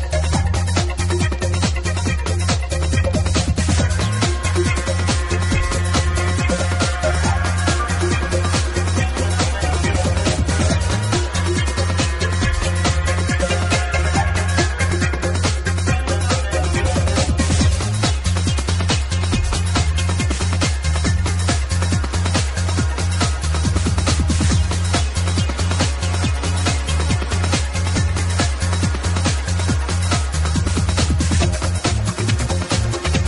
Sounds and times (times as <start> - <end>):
Music: 0.0 - 33.2.